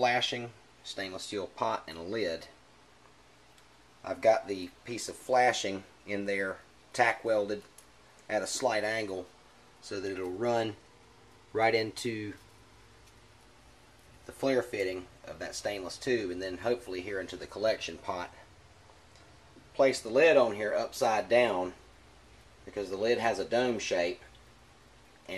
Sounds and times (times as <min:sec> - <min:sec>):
Speech: 0:00.0 - 0:02.6, 0:04.0 - 0:07.7, 0:08.3 - 0:10.8, 0:11.5 - 0:12.5, 0:14.3 - 0:18.5, 0:19.6 - 0:21.8, 0:22.6 - 0:24.3.